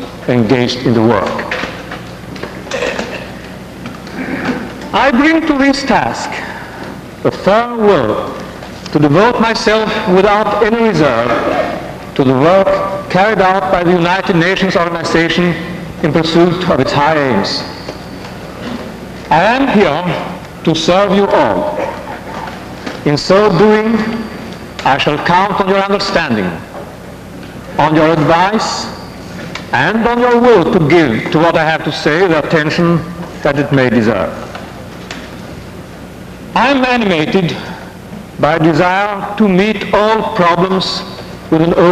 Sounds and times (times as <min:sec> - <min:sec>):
Narration, monologue: 0:00.0 - 0:41.9
Male speech, man speaking: 0:00.3 - 0:01.5, 0:04.9 - 0:06.5, 0:07.3 - 0:11.5, 0:12.2 - 0:17.7, 0:19.3 - 0:21.8, 0:23.0 - 0:24.2, 0:24.8 - 0:26.6, 0:27.8 - 0:29.0, 0:29.7 - 0:34.4, 0:36.6 - 0:37.7, 0:38.4 - 0:41.9.